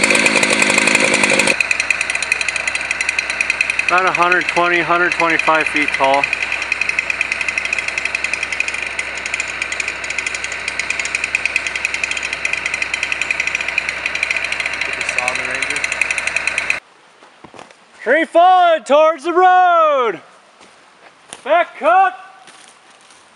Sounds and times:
Jackhammer: 0.0s - 16.8s
Outside, rural or natural: 0.0s - 23.3s
Speech: 3.9s - 6.3s, 14.9s - 15.8s, 18.0s - 20.2s, 21.4s - 22.4s.

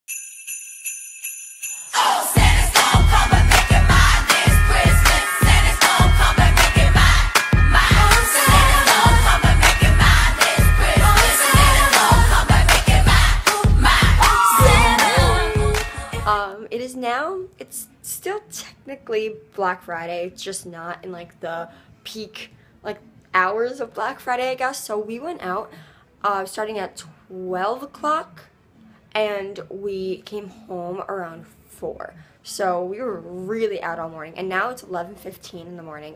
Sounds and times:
Jingle bell: 0.1s - 16.4s.

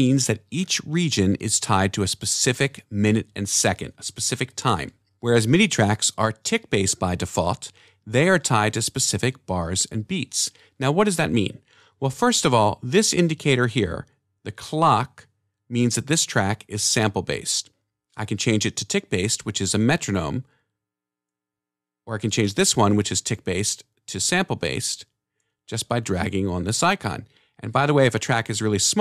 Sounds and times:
Speech: 0.0s - 20.5s, 22.1s - 25.1s, 25.7s - 29.0s.

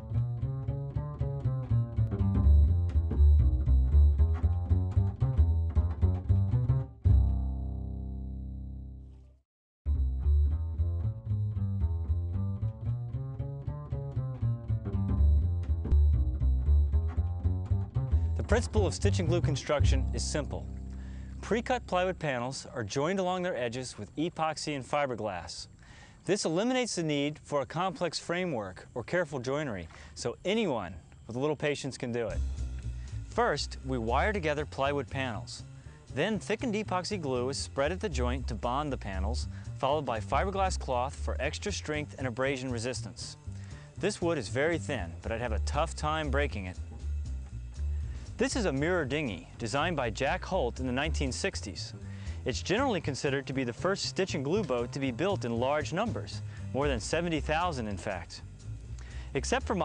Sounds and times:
Music: 0.0s - 59.8s
Speech: 18.4s - 20.7s, 21.4s - 32.4s, 33.3s - 43.4s, 44.0s - 46.8s, 48.4s - 58.4s, 59.3s - 59.8s.

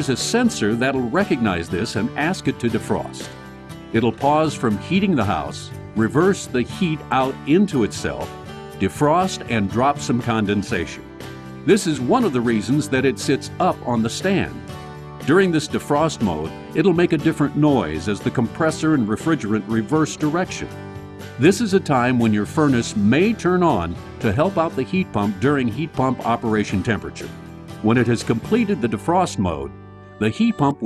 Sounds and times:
Speech: 0.0s - 3.3s, 4.0s - 11.0s, 11.7s - 14.6s, 15.2s - 20.7s, 21.4s - 30.8s
Music: 0.0s - 30.8s.

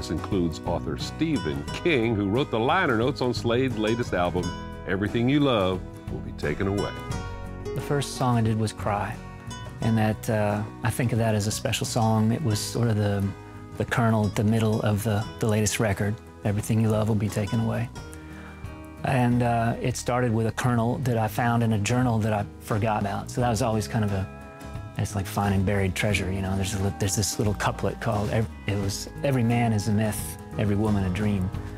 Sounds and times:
Speech: 0.0s - 7.0s, 7.8s - 9.2s, 9.8s - 17.9s, 19.0s - 24.3s, 25.0s - 31.6s
Sad music: 0.0s - 31.7s.

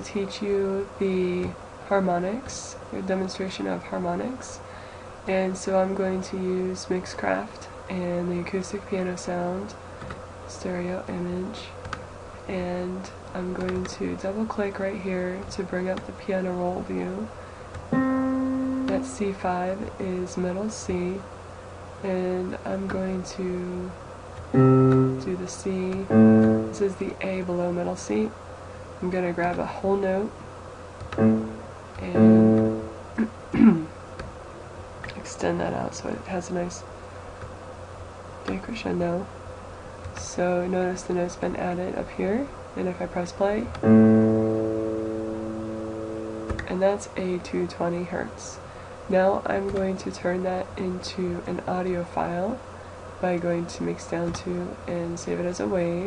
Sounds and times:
Speech: 0.0s - 9.8s, 10.5s - 11.8s, 12.4s - 17.4s, 18.9s - 21.3s, 22.0s - 24.0s, 25.2s - 28.4s, 29.0s - 30.4s, 32.0s - 32.4s, 33.2s - 33.9s, 35.1s - 36.9s, 38.5s - 39.3s, 40.2s - 43.8s, 46.6s - 56.0s.

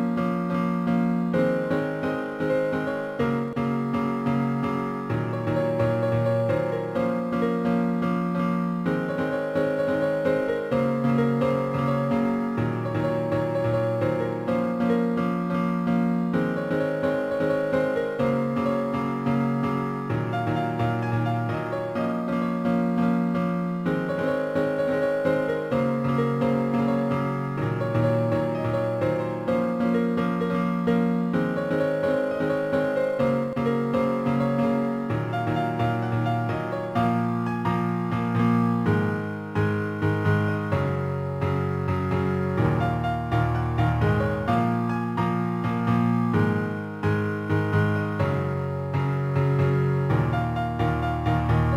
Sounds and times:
Music: 0.0s - 51.7s.

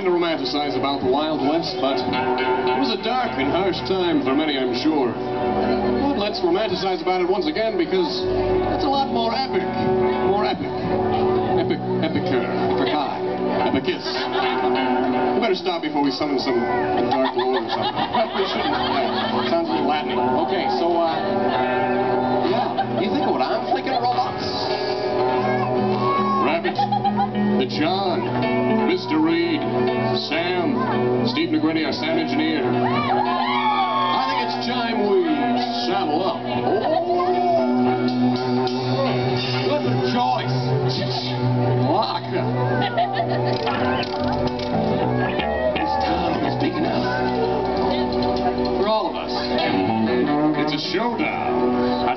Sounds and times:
Music: 0.0s - 52.1s.

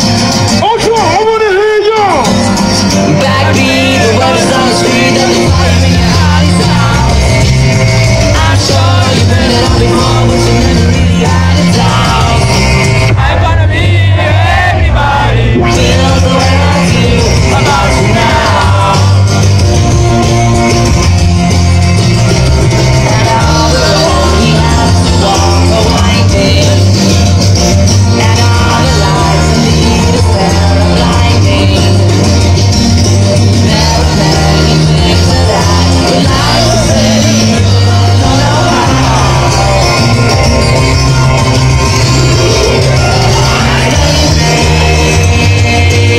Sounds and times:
Dance music: 0.0s - 46.1s
Exciting music: 0.0s - 46.1s.

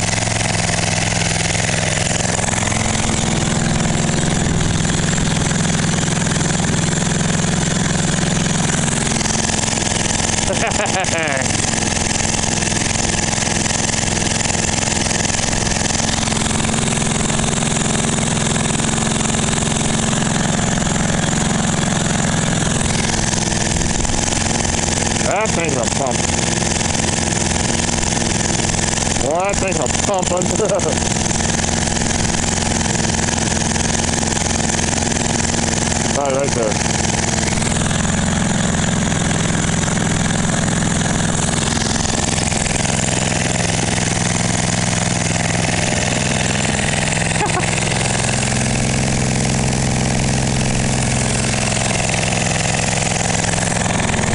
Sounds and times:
Speech: 25.2s - 26.2s, 29.2s - 31.0s, 36.1s - 36.8s.

